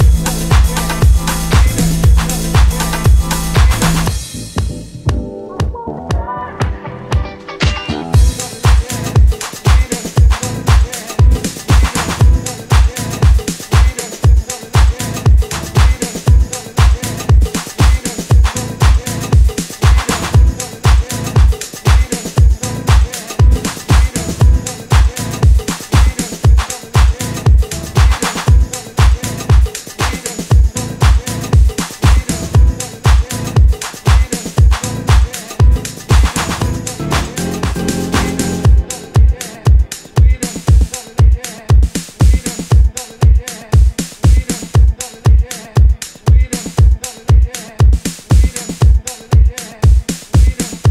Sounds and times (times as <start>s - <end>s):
Disco: 0.0s - 50.9s.